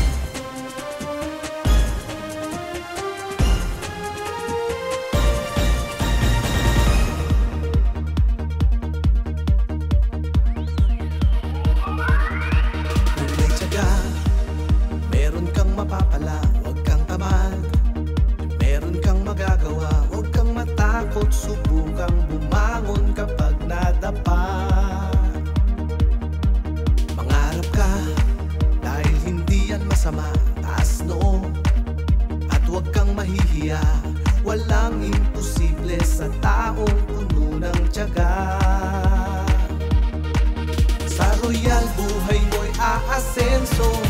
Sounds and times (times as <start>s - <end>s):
Jingle (music): 0.0s - 8.6s, 11.0s - 17.7s, 32.5s - 44.0s.